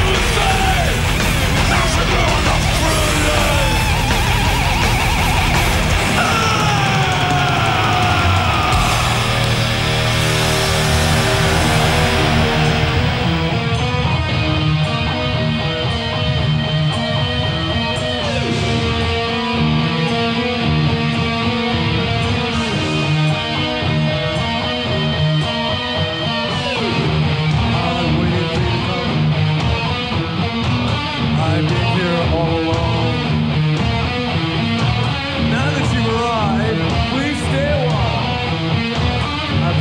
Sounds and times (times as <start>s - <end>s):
Heavy metal: 0.0s - 39.8s.